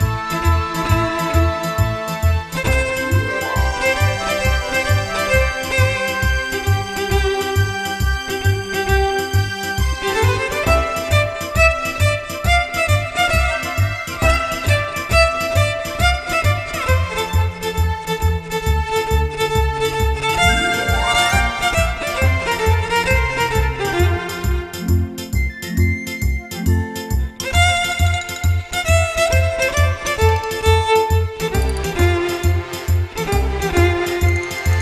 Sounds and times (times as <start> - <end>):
Violin, fiddle: 0.0 - 25.1, 27.3 - 34.8.